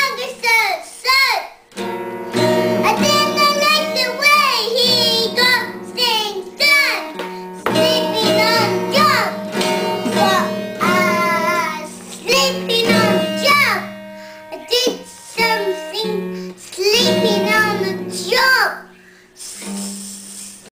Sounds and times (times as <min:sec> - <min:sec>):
Child singing: 0:00.0 - 0:01.6, 0:02.4 - 0:20.0
Guitar: 0:00.0 - 0:20.7.